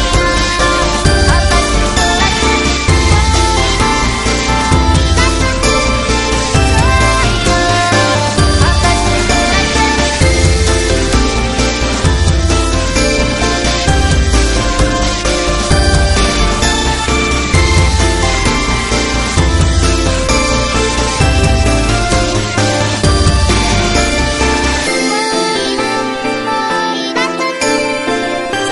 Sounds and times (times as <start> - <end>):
Music: 0.0 - 28.7.